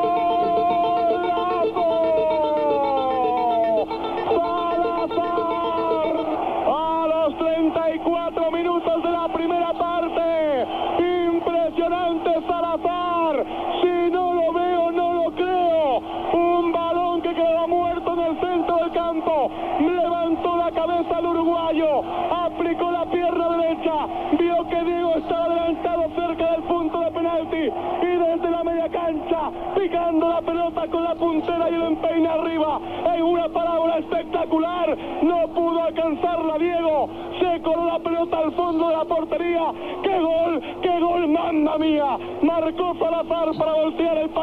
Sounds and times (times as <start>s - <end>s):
Speech: 0.0s - 44.4s.